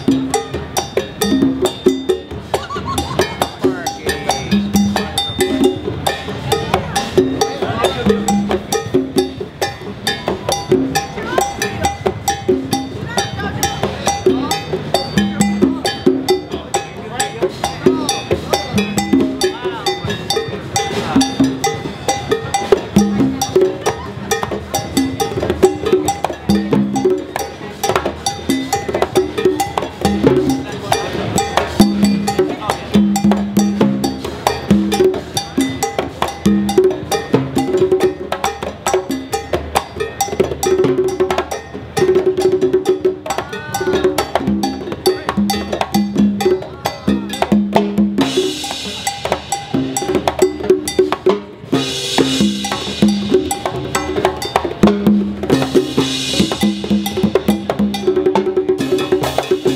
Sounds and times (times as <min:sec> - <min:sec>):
Wood block: 0:00.0 - 0:59.7
Speech: 0:03.3 - 0:04.6, 0:06.6 - 0:08.4, 0:11.0 - 0:12.1, 0:13.0 - 0:21.7, 0:30.4 - 0:33.2, 0:43.3 - 0:45.8.